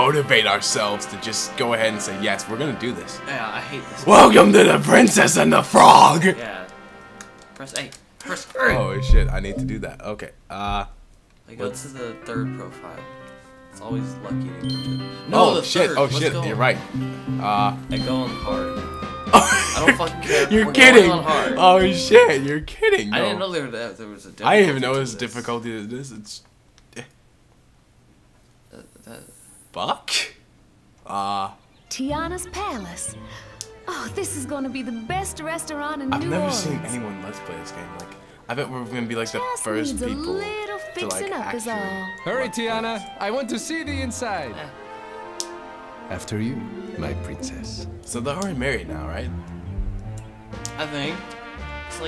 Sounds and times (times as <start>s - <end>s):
Speech: 0.0s - 6.7s, 7.6s - 10.9s, 11.5s - 13.0s, 15.3s - 16.8s, 19.8s - 26.4s, 33.9s - 44.4s
Music: 0.0s - 25.6s, 31.1s - 52.0s.